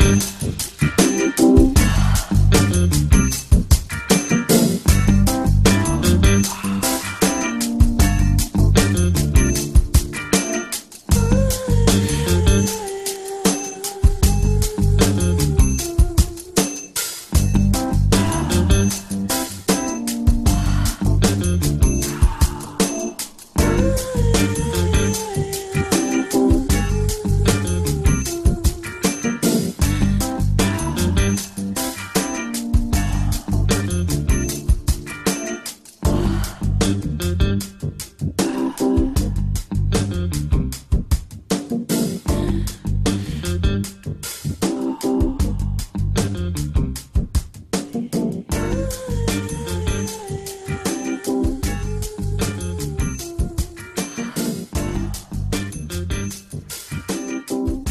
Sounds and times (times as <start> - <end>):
Music: 0.0 - 57.9.